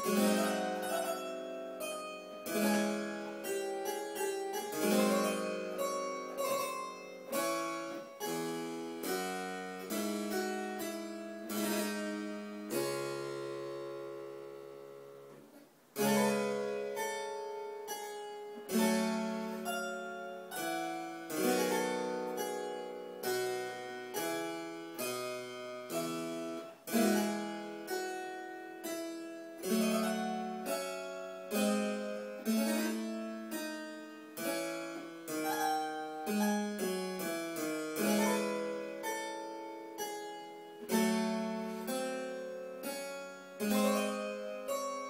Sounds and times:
Harpsichord: 0.0 - 15.3, 16.0 - 45.0.

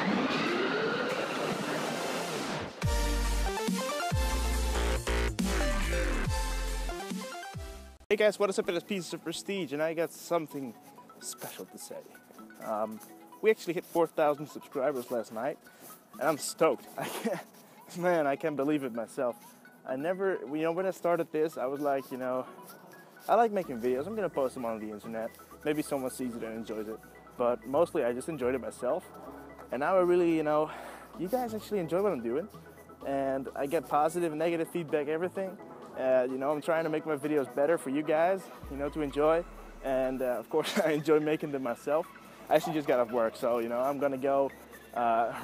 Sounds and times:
Music: 1.5 - 45.4
Speech: 8.1 - 12.0, 12.6 - 15.6, 16.2 - 22.5, 23.3 - 29.0, 29.7 - 45.4.

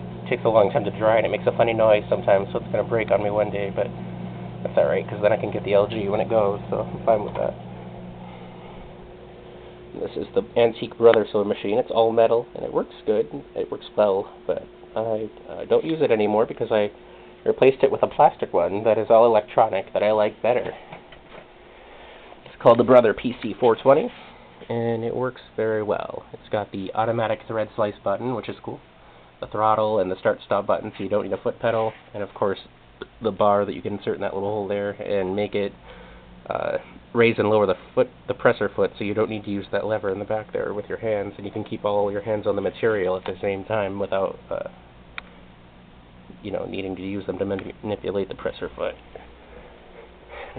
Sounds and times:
Speech: 0.2 - 4.0, 4.6 - 7.6, 9.9 - 20.8, 22.5 - 28.8, 29.4 - 35.8, 36.5 - 44.8, 46.3 - 49.0.

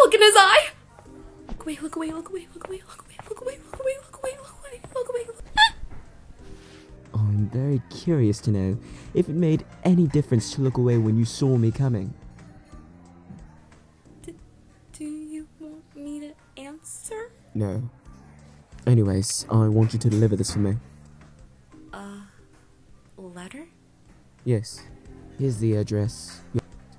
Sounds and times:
Music: 0.0 - 26.9.

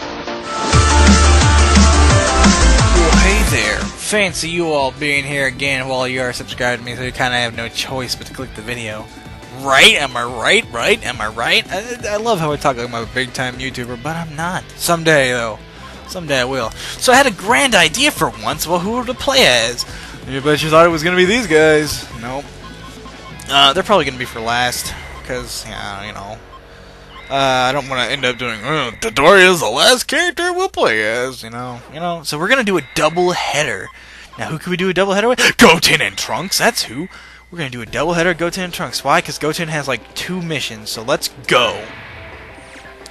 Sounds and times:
Speech: 3.0 - 22.4, 23.4 - 26.4, 27.3 - 41.9.

